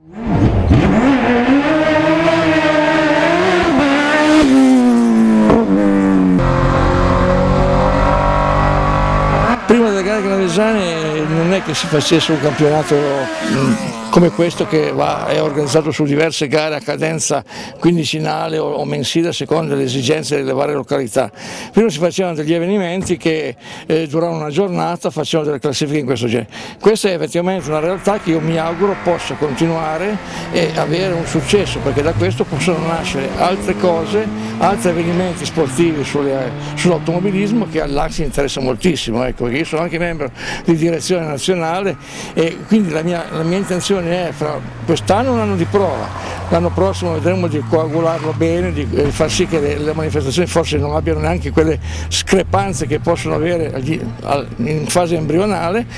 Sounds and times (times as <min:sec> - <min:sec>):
Car: 0:00.0 - 0:16.6, 0:27.5 - 0:55.9
Speech: 0:09.7 - 0:55.9.